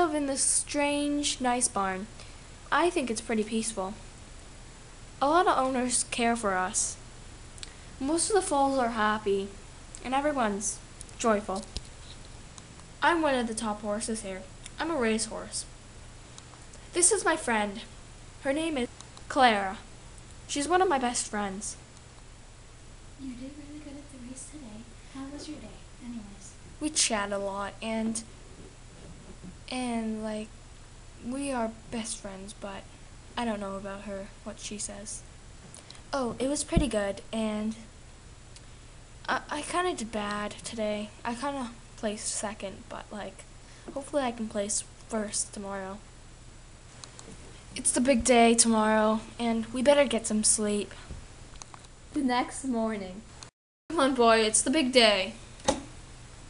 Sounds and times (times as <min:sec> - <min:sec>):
Speech: 0:00.0 - 0:02.1, 0:02.7 - 0:04.0, 0:05.2 - 0:07.0, 0:08.0 - 0:11.8, 0:13.0 - 0:15.7, 0:16.9 - 0:19.9, 0:20.5 - 0:21.8, 0:23.2 - 0:28.3, 0:29.7 - 0:30.5, 0:31.2 - 0:35.2, 0:36.1 - 0:37.9, 0:39.3 - 0:46.0, 0:47.8 - 0:51.0, 0:52.1 - 0:53.3, 0:53.9 - 0:55.4.